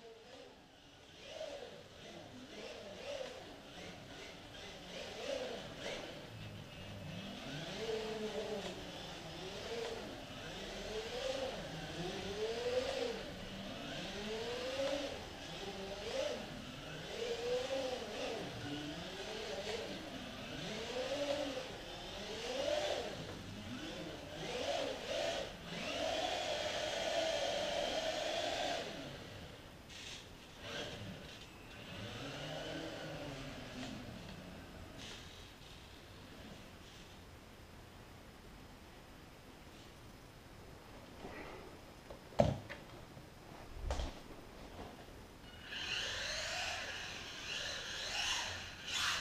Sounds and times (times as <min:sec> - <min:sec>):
Car: 0:00.1 - 0:37.1, 0:45.7 - 0:49.2.